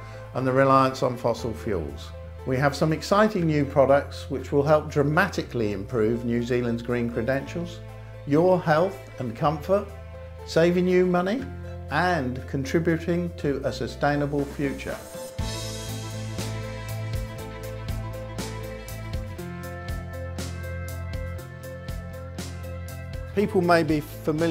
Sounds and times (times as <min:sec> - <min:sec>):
Music: 0:00.0 - 0:24.5
Speech: 0:00.4 - 0:09.9, 0:10.5 - 0:15.2, 0:23.4 - 0:24.5.